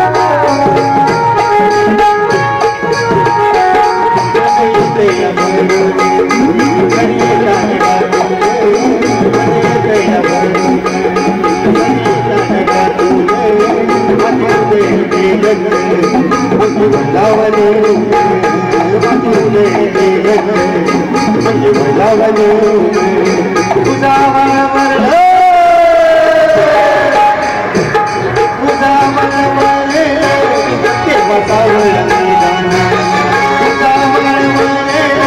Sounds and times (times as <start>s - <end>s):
Folk music: 0.0s - 35.2s.